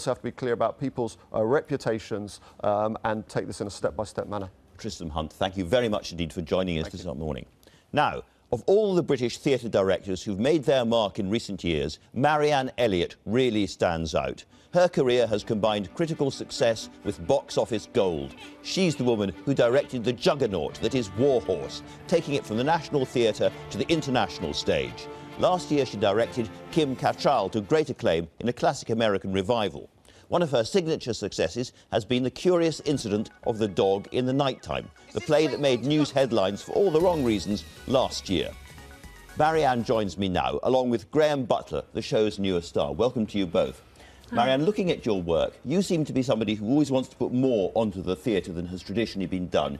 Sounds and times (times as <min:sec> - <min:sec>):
Speech: 0:00.0 - 0:38.6, 0:39.4 - 0:49.7
Music: 0:13.8 - 0:28.3, 0:32.4 - 0:40.7, 0:43.0 - 0:49.7.